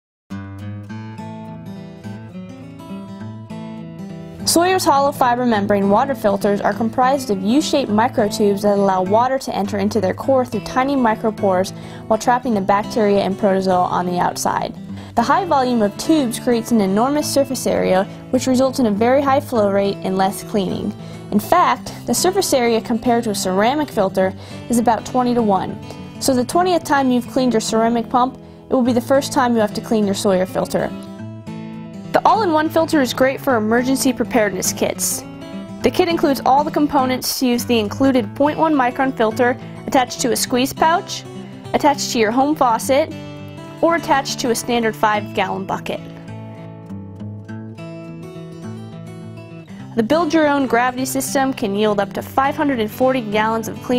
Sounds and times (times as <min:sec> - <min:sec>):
Music: 0:00.3 - 0:53.9
Speech: 0:04.5 - 0:31.0, 0:32.2 - 0:35.2, 0:35.8 - 0:43.1, 0:43.8 - 0:46.1, 0:50.0 - 0:53.9.